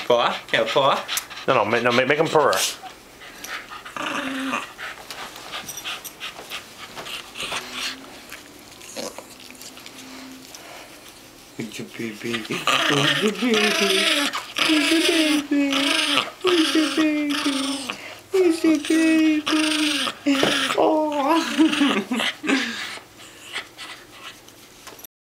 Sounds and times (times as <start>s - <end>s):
Speech: 11.6s - 21.7s.